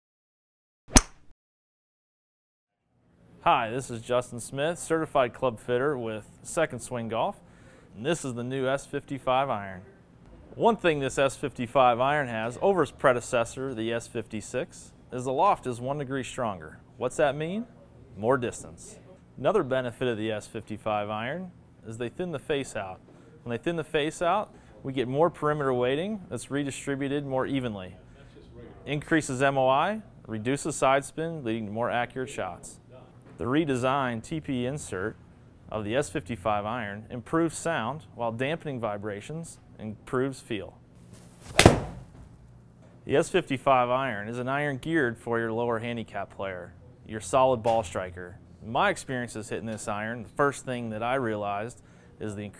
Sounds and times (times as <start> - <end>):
Speech: 3.4 - 7.4, 8.0 - 10.0, 10.6 - 40.8, 43.0 - 52.5.